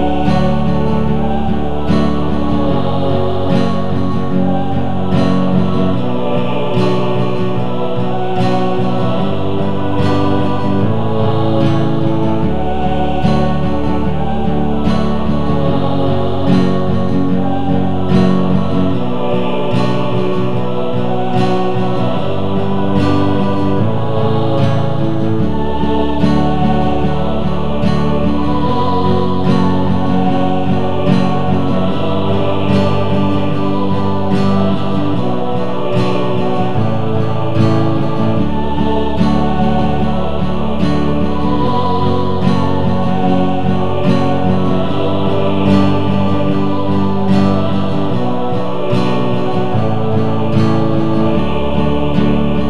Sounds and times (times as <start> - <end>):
Music: 0.0 - 52.7.